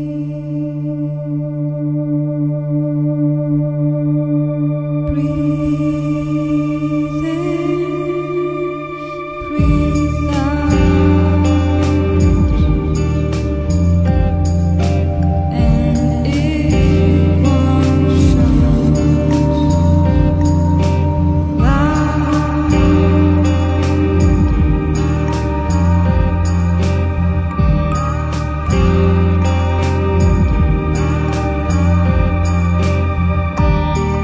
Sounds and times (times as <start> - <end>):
Music: 0.0 - 34.2.